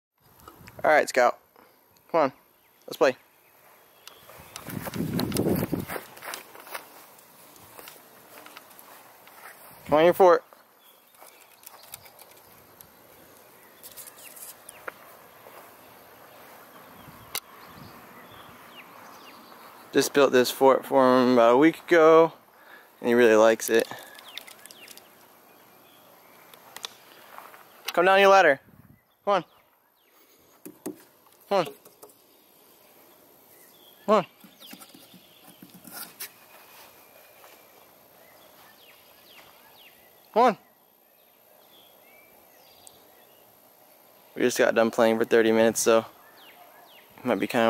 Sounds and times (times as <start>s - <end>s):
Speech: 0.8s - 1.4s, 2.1s - 3.2s, 9.9s - 10.4s, 19.9s - 22.4s, 23.0s - 24.0s, 27.9s - 28.6s, 29.2s - 29.5s, 31.5s - 31.8s, 34.1s - 34.3s, 40.3s - 40.6s, 44.4s - 46.1s, 47.2s - 47.6s.